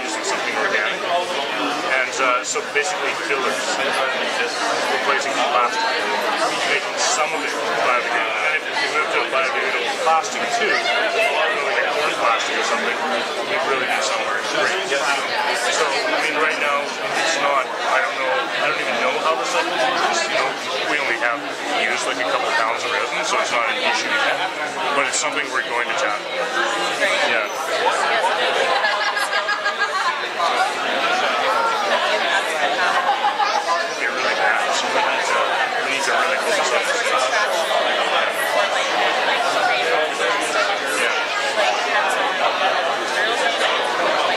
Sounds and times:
Speech: 0:00.0 - 0:44.3.

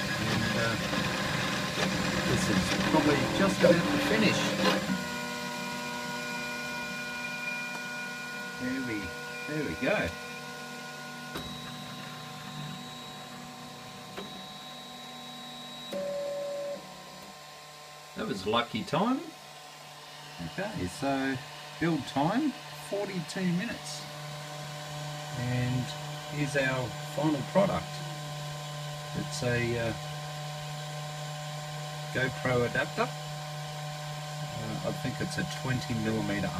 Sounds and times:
Speech: 0:00.2 - 0:00.8, 0:02.3 - 0:04.6, 0:08.6 - 0:10.2, 0:18.2 - 0:19.4, 0:20.4 - 0:24.1, 0:25.3 - 0:28.0, 0:29.2 - 0:30.0, 0:32.1 - 0:33.2, 0:34.5 - 0:36.5.

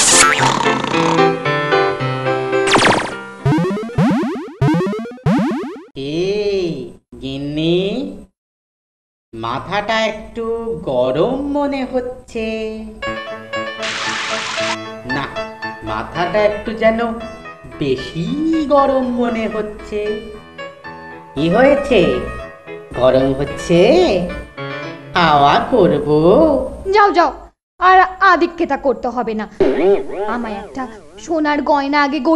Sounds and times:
Music: 0:00.2 - 0:03.5, 0:13.0 - 0:26.0
Speech: 0:06.0 - 0:08.3, 0:09.4 - 0:13.0, 0:15.1 - 0:17.2, 0:17.8 - 0:20.3, 0:21.4 - 0:22.3, 0:23.0 - 0:24.3, 0:25.2 - 0:32.3.

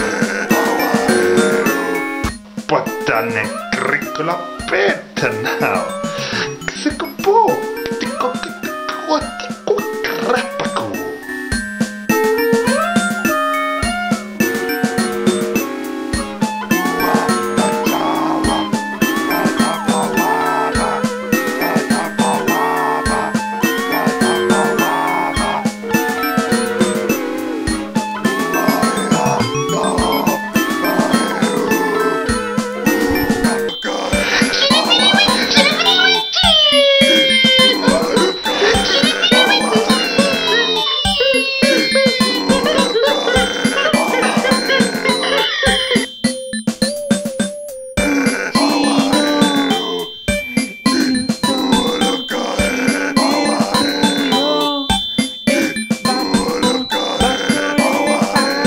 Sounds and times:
Music: 0:00.0 - 0:58.6
Male speech, man speaking: 0:02.7 - 0:11.0.

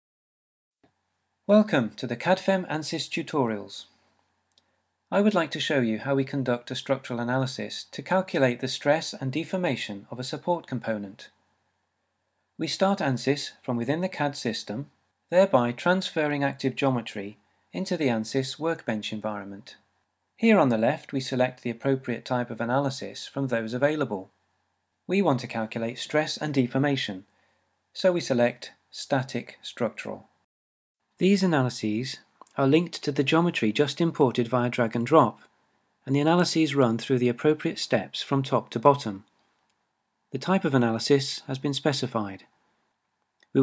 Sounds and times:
Speech: 0:01.5 - 0:03.9, 0:05.1 - 0:11.4, 0:12.6 - 0:19.8, 0:20.4 - 0:24.4, 0:25.1 - 0:27.3, 0:28.0 - 0:30.3, 0:31.2 - 0:39.3, 0:40.4 - 0:42.5.

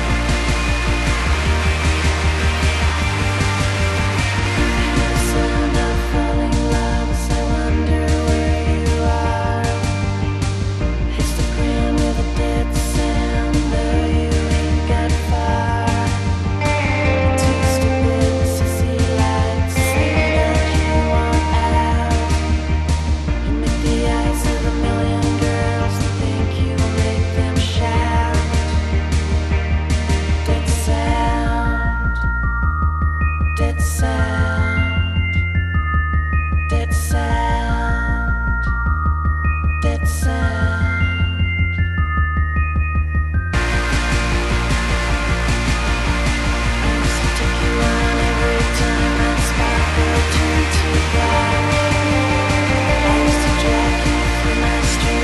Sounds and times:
Music: 0:00.0 - 0:55.2.

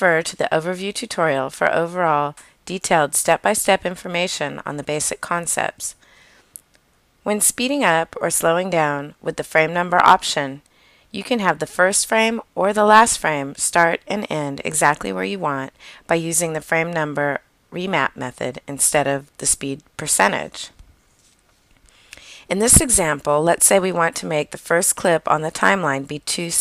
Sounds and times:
Speech: 0:00.0 - 0:06.0, 0:07.3 - 0:10.6, 0:11.2 - 0:20.7, 0:22.5 - 0:26.6.

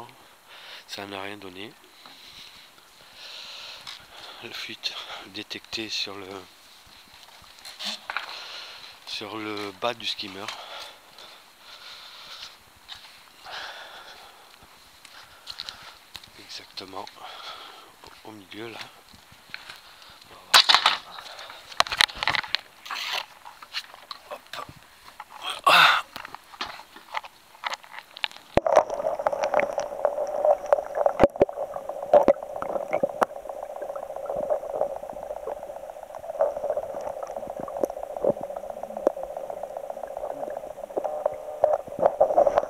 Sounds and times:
Speech: 0:00.9 - 0:01.8, 0:04.4 - 0:06.5, 0:09.1 - 0:10.6, 0:16.4 - 0:17.2, 0:18.2 - 0:18.9.

